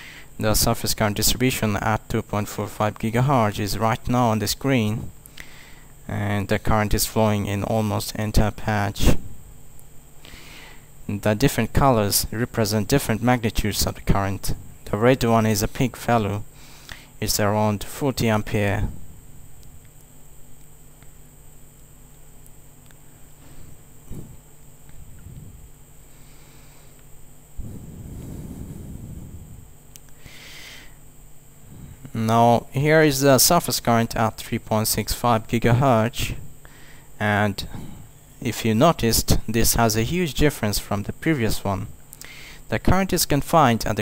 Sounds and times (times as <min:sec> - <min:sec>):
Inside, small room: 0:00.0 - 0:44.0
Speech: 0:00.4 - 0:05.1, 0:06.1 - 0:09.2, 0:11.1 - 0:16.5, 0:17.2 - 0:19.0, 0:32.1 - 0:36.4, 0:37.2 - 0:37.8, 0:38.4 - 0:41.9, 0:42.7 - 0:44.0.